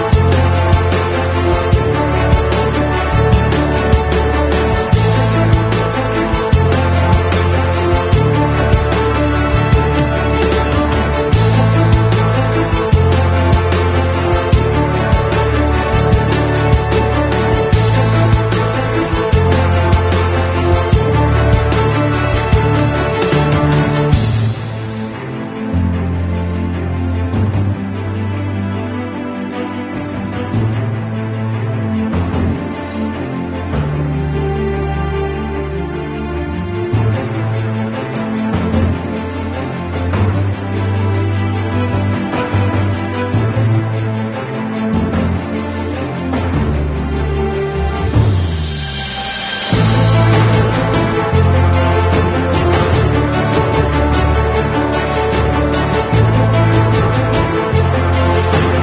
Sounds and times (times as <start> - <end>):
Music: 0.0 - 58.8.